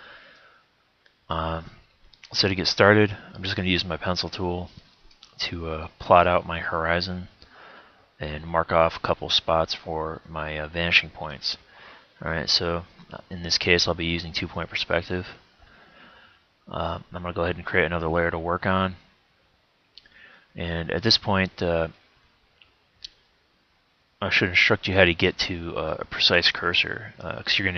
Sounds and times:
Speech: 1.3s - 4.8s, 5.4s - 7.4s, 8.2s - 15.4s, 16.7s - 19.0s, 20.6s - 22.0s, 24.2s - 27.7s.

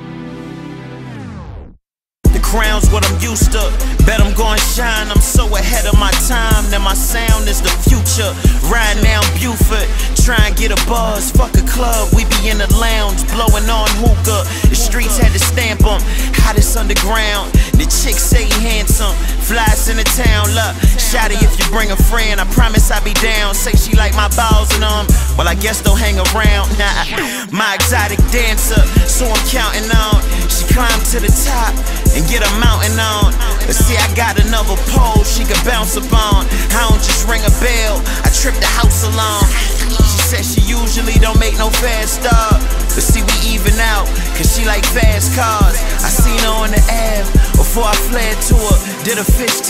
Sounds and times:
Music: 0.0s - 49.6s.

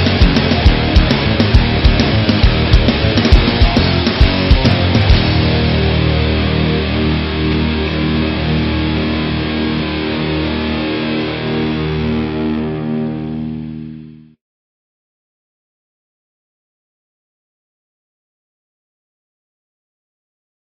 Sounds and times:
Music: 0.0s - 14.4s.

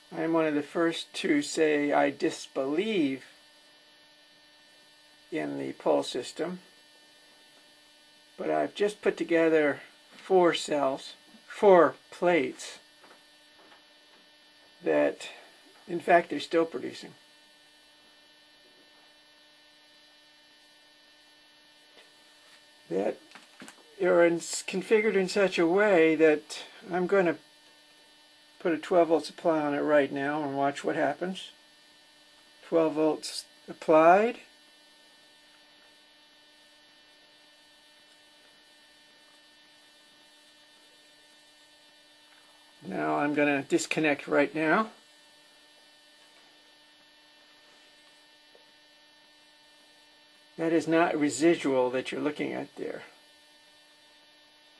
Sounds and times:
Speech: 0.1s - 3.3s, 5.3s - 6.7s, 8.4s - 12.9s, 14.8s - 17.2s, 22.9s - 23.2s, 24.0s - 27.4s, 28.6s - 31.6s, 32.6s - 34.5s, 42.8s - 45.0s, 50.6s - 53.2s.

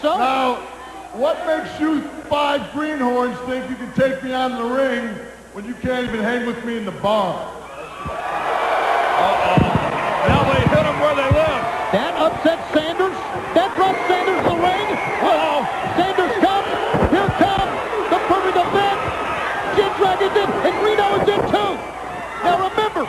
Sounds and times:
Speech: 0.0s - 7.6s, 9.3s - 19.0s, 19.7s - 21.8s, 22.4s - 23.0s.

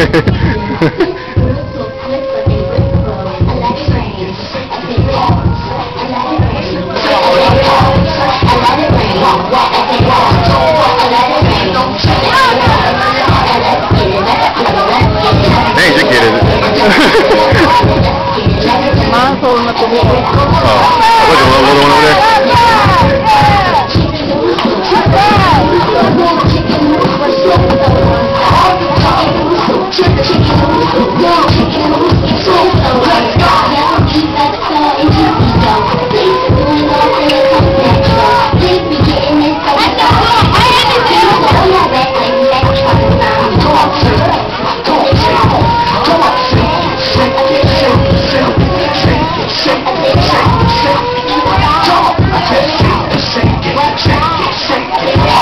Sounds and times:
Music: 0.0s - 55.4s.

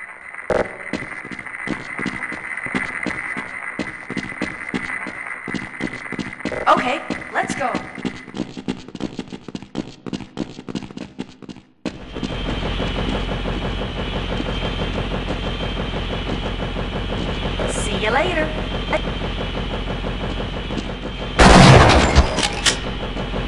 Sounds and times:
Speech: 6.7s - 8.0s, 17.6s - 18.6s.

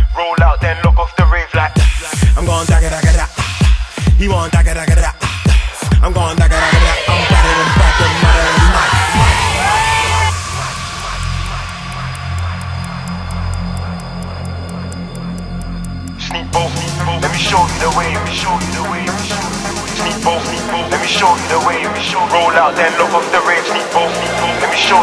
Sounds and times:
Music: 0.0s - 25.0s.

